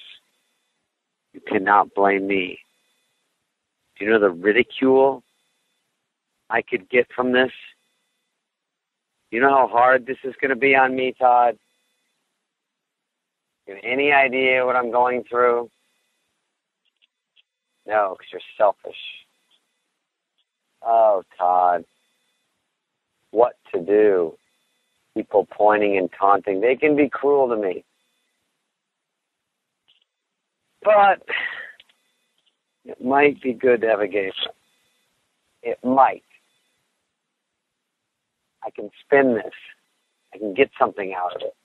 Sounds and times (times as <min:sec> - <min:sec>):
Speech: 0:01.4 - 0:02.6, 0:04.0 - 0:05.2, 0:06.5 - 0:07.7, 0:09.4 - 0:11.6, 0:13.7 - 0:15.7, 0:17.9 - 0:19.2, 0:20.8 - 0:21.8, 0:23.4 - 0:24.3, 0:25.2 - 0:27.8, 0:30.9 - 0:31.8, 0:32.9 - 0:34.5, 0:35.7 - 0:36.2, 0:38.6 - 0:39.7, 0:40.4 - 0:41.5.